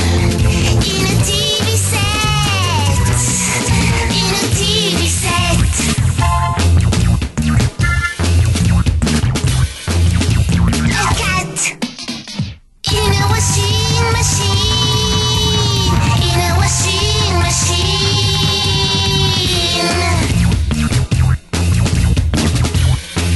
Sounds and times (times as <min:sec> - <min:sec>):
Music: 0:00.0 - 0:23.3.